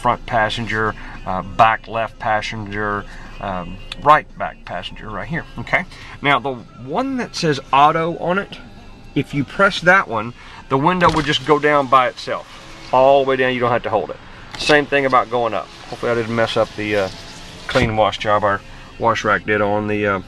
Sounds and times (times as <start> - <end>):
Speech: 0.0 - 8.6, 9.2 - 12.4, 13.0 - 17.1, 17.7 - 20.2
Music: 0.0 - 20.2
Power windows, electric windows: 11.0 - 19.0.